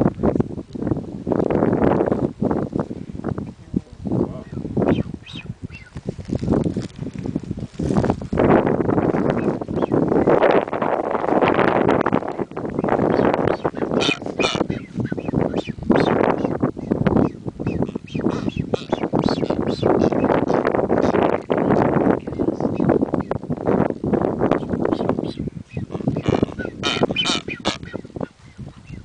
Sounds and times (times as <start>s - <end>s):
Speech: 3.6s - 4.6s.